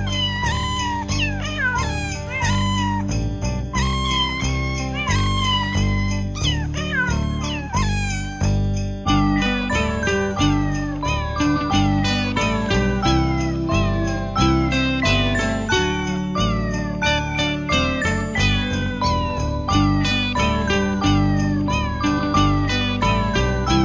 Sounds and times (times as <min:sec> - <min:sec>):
Music: 0:00.0 - 0:23.8.